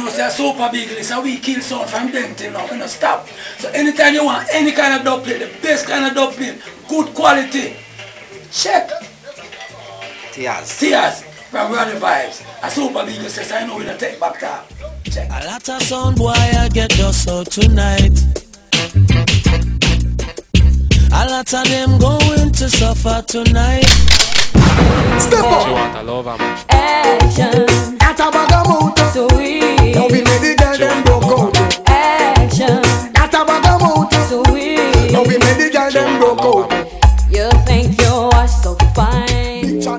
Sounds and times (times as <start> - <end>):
Speech: 0.0 - 7.8, 10.4 - 15.5, 25.2 - 26.5
Music: 0.0 - 39.9.